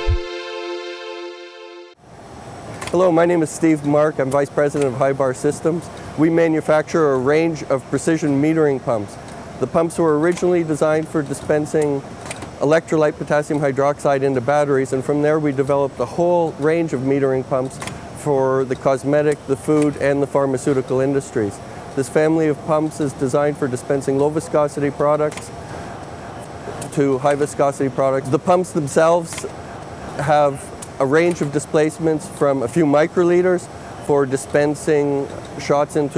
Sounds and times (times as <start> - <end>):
Speech: 2.9 - 12.0, 12.6 - 25.5, 26.8 - 29.5, 30.2 - 36.1.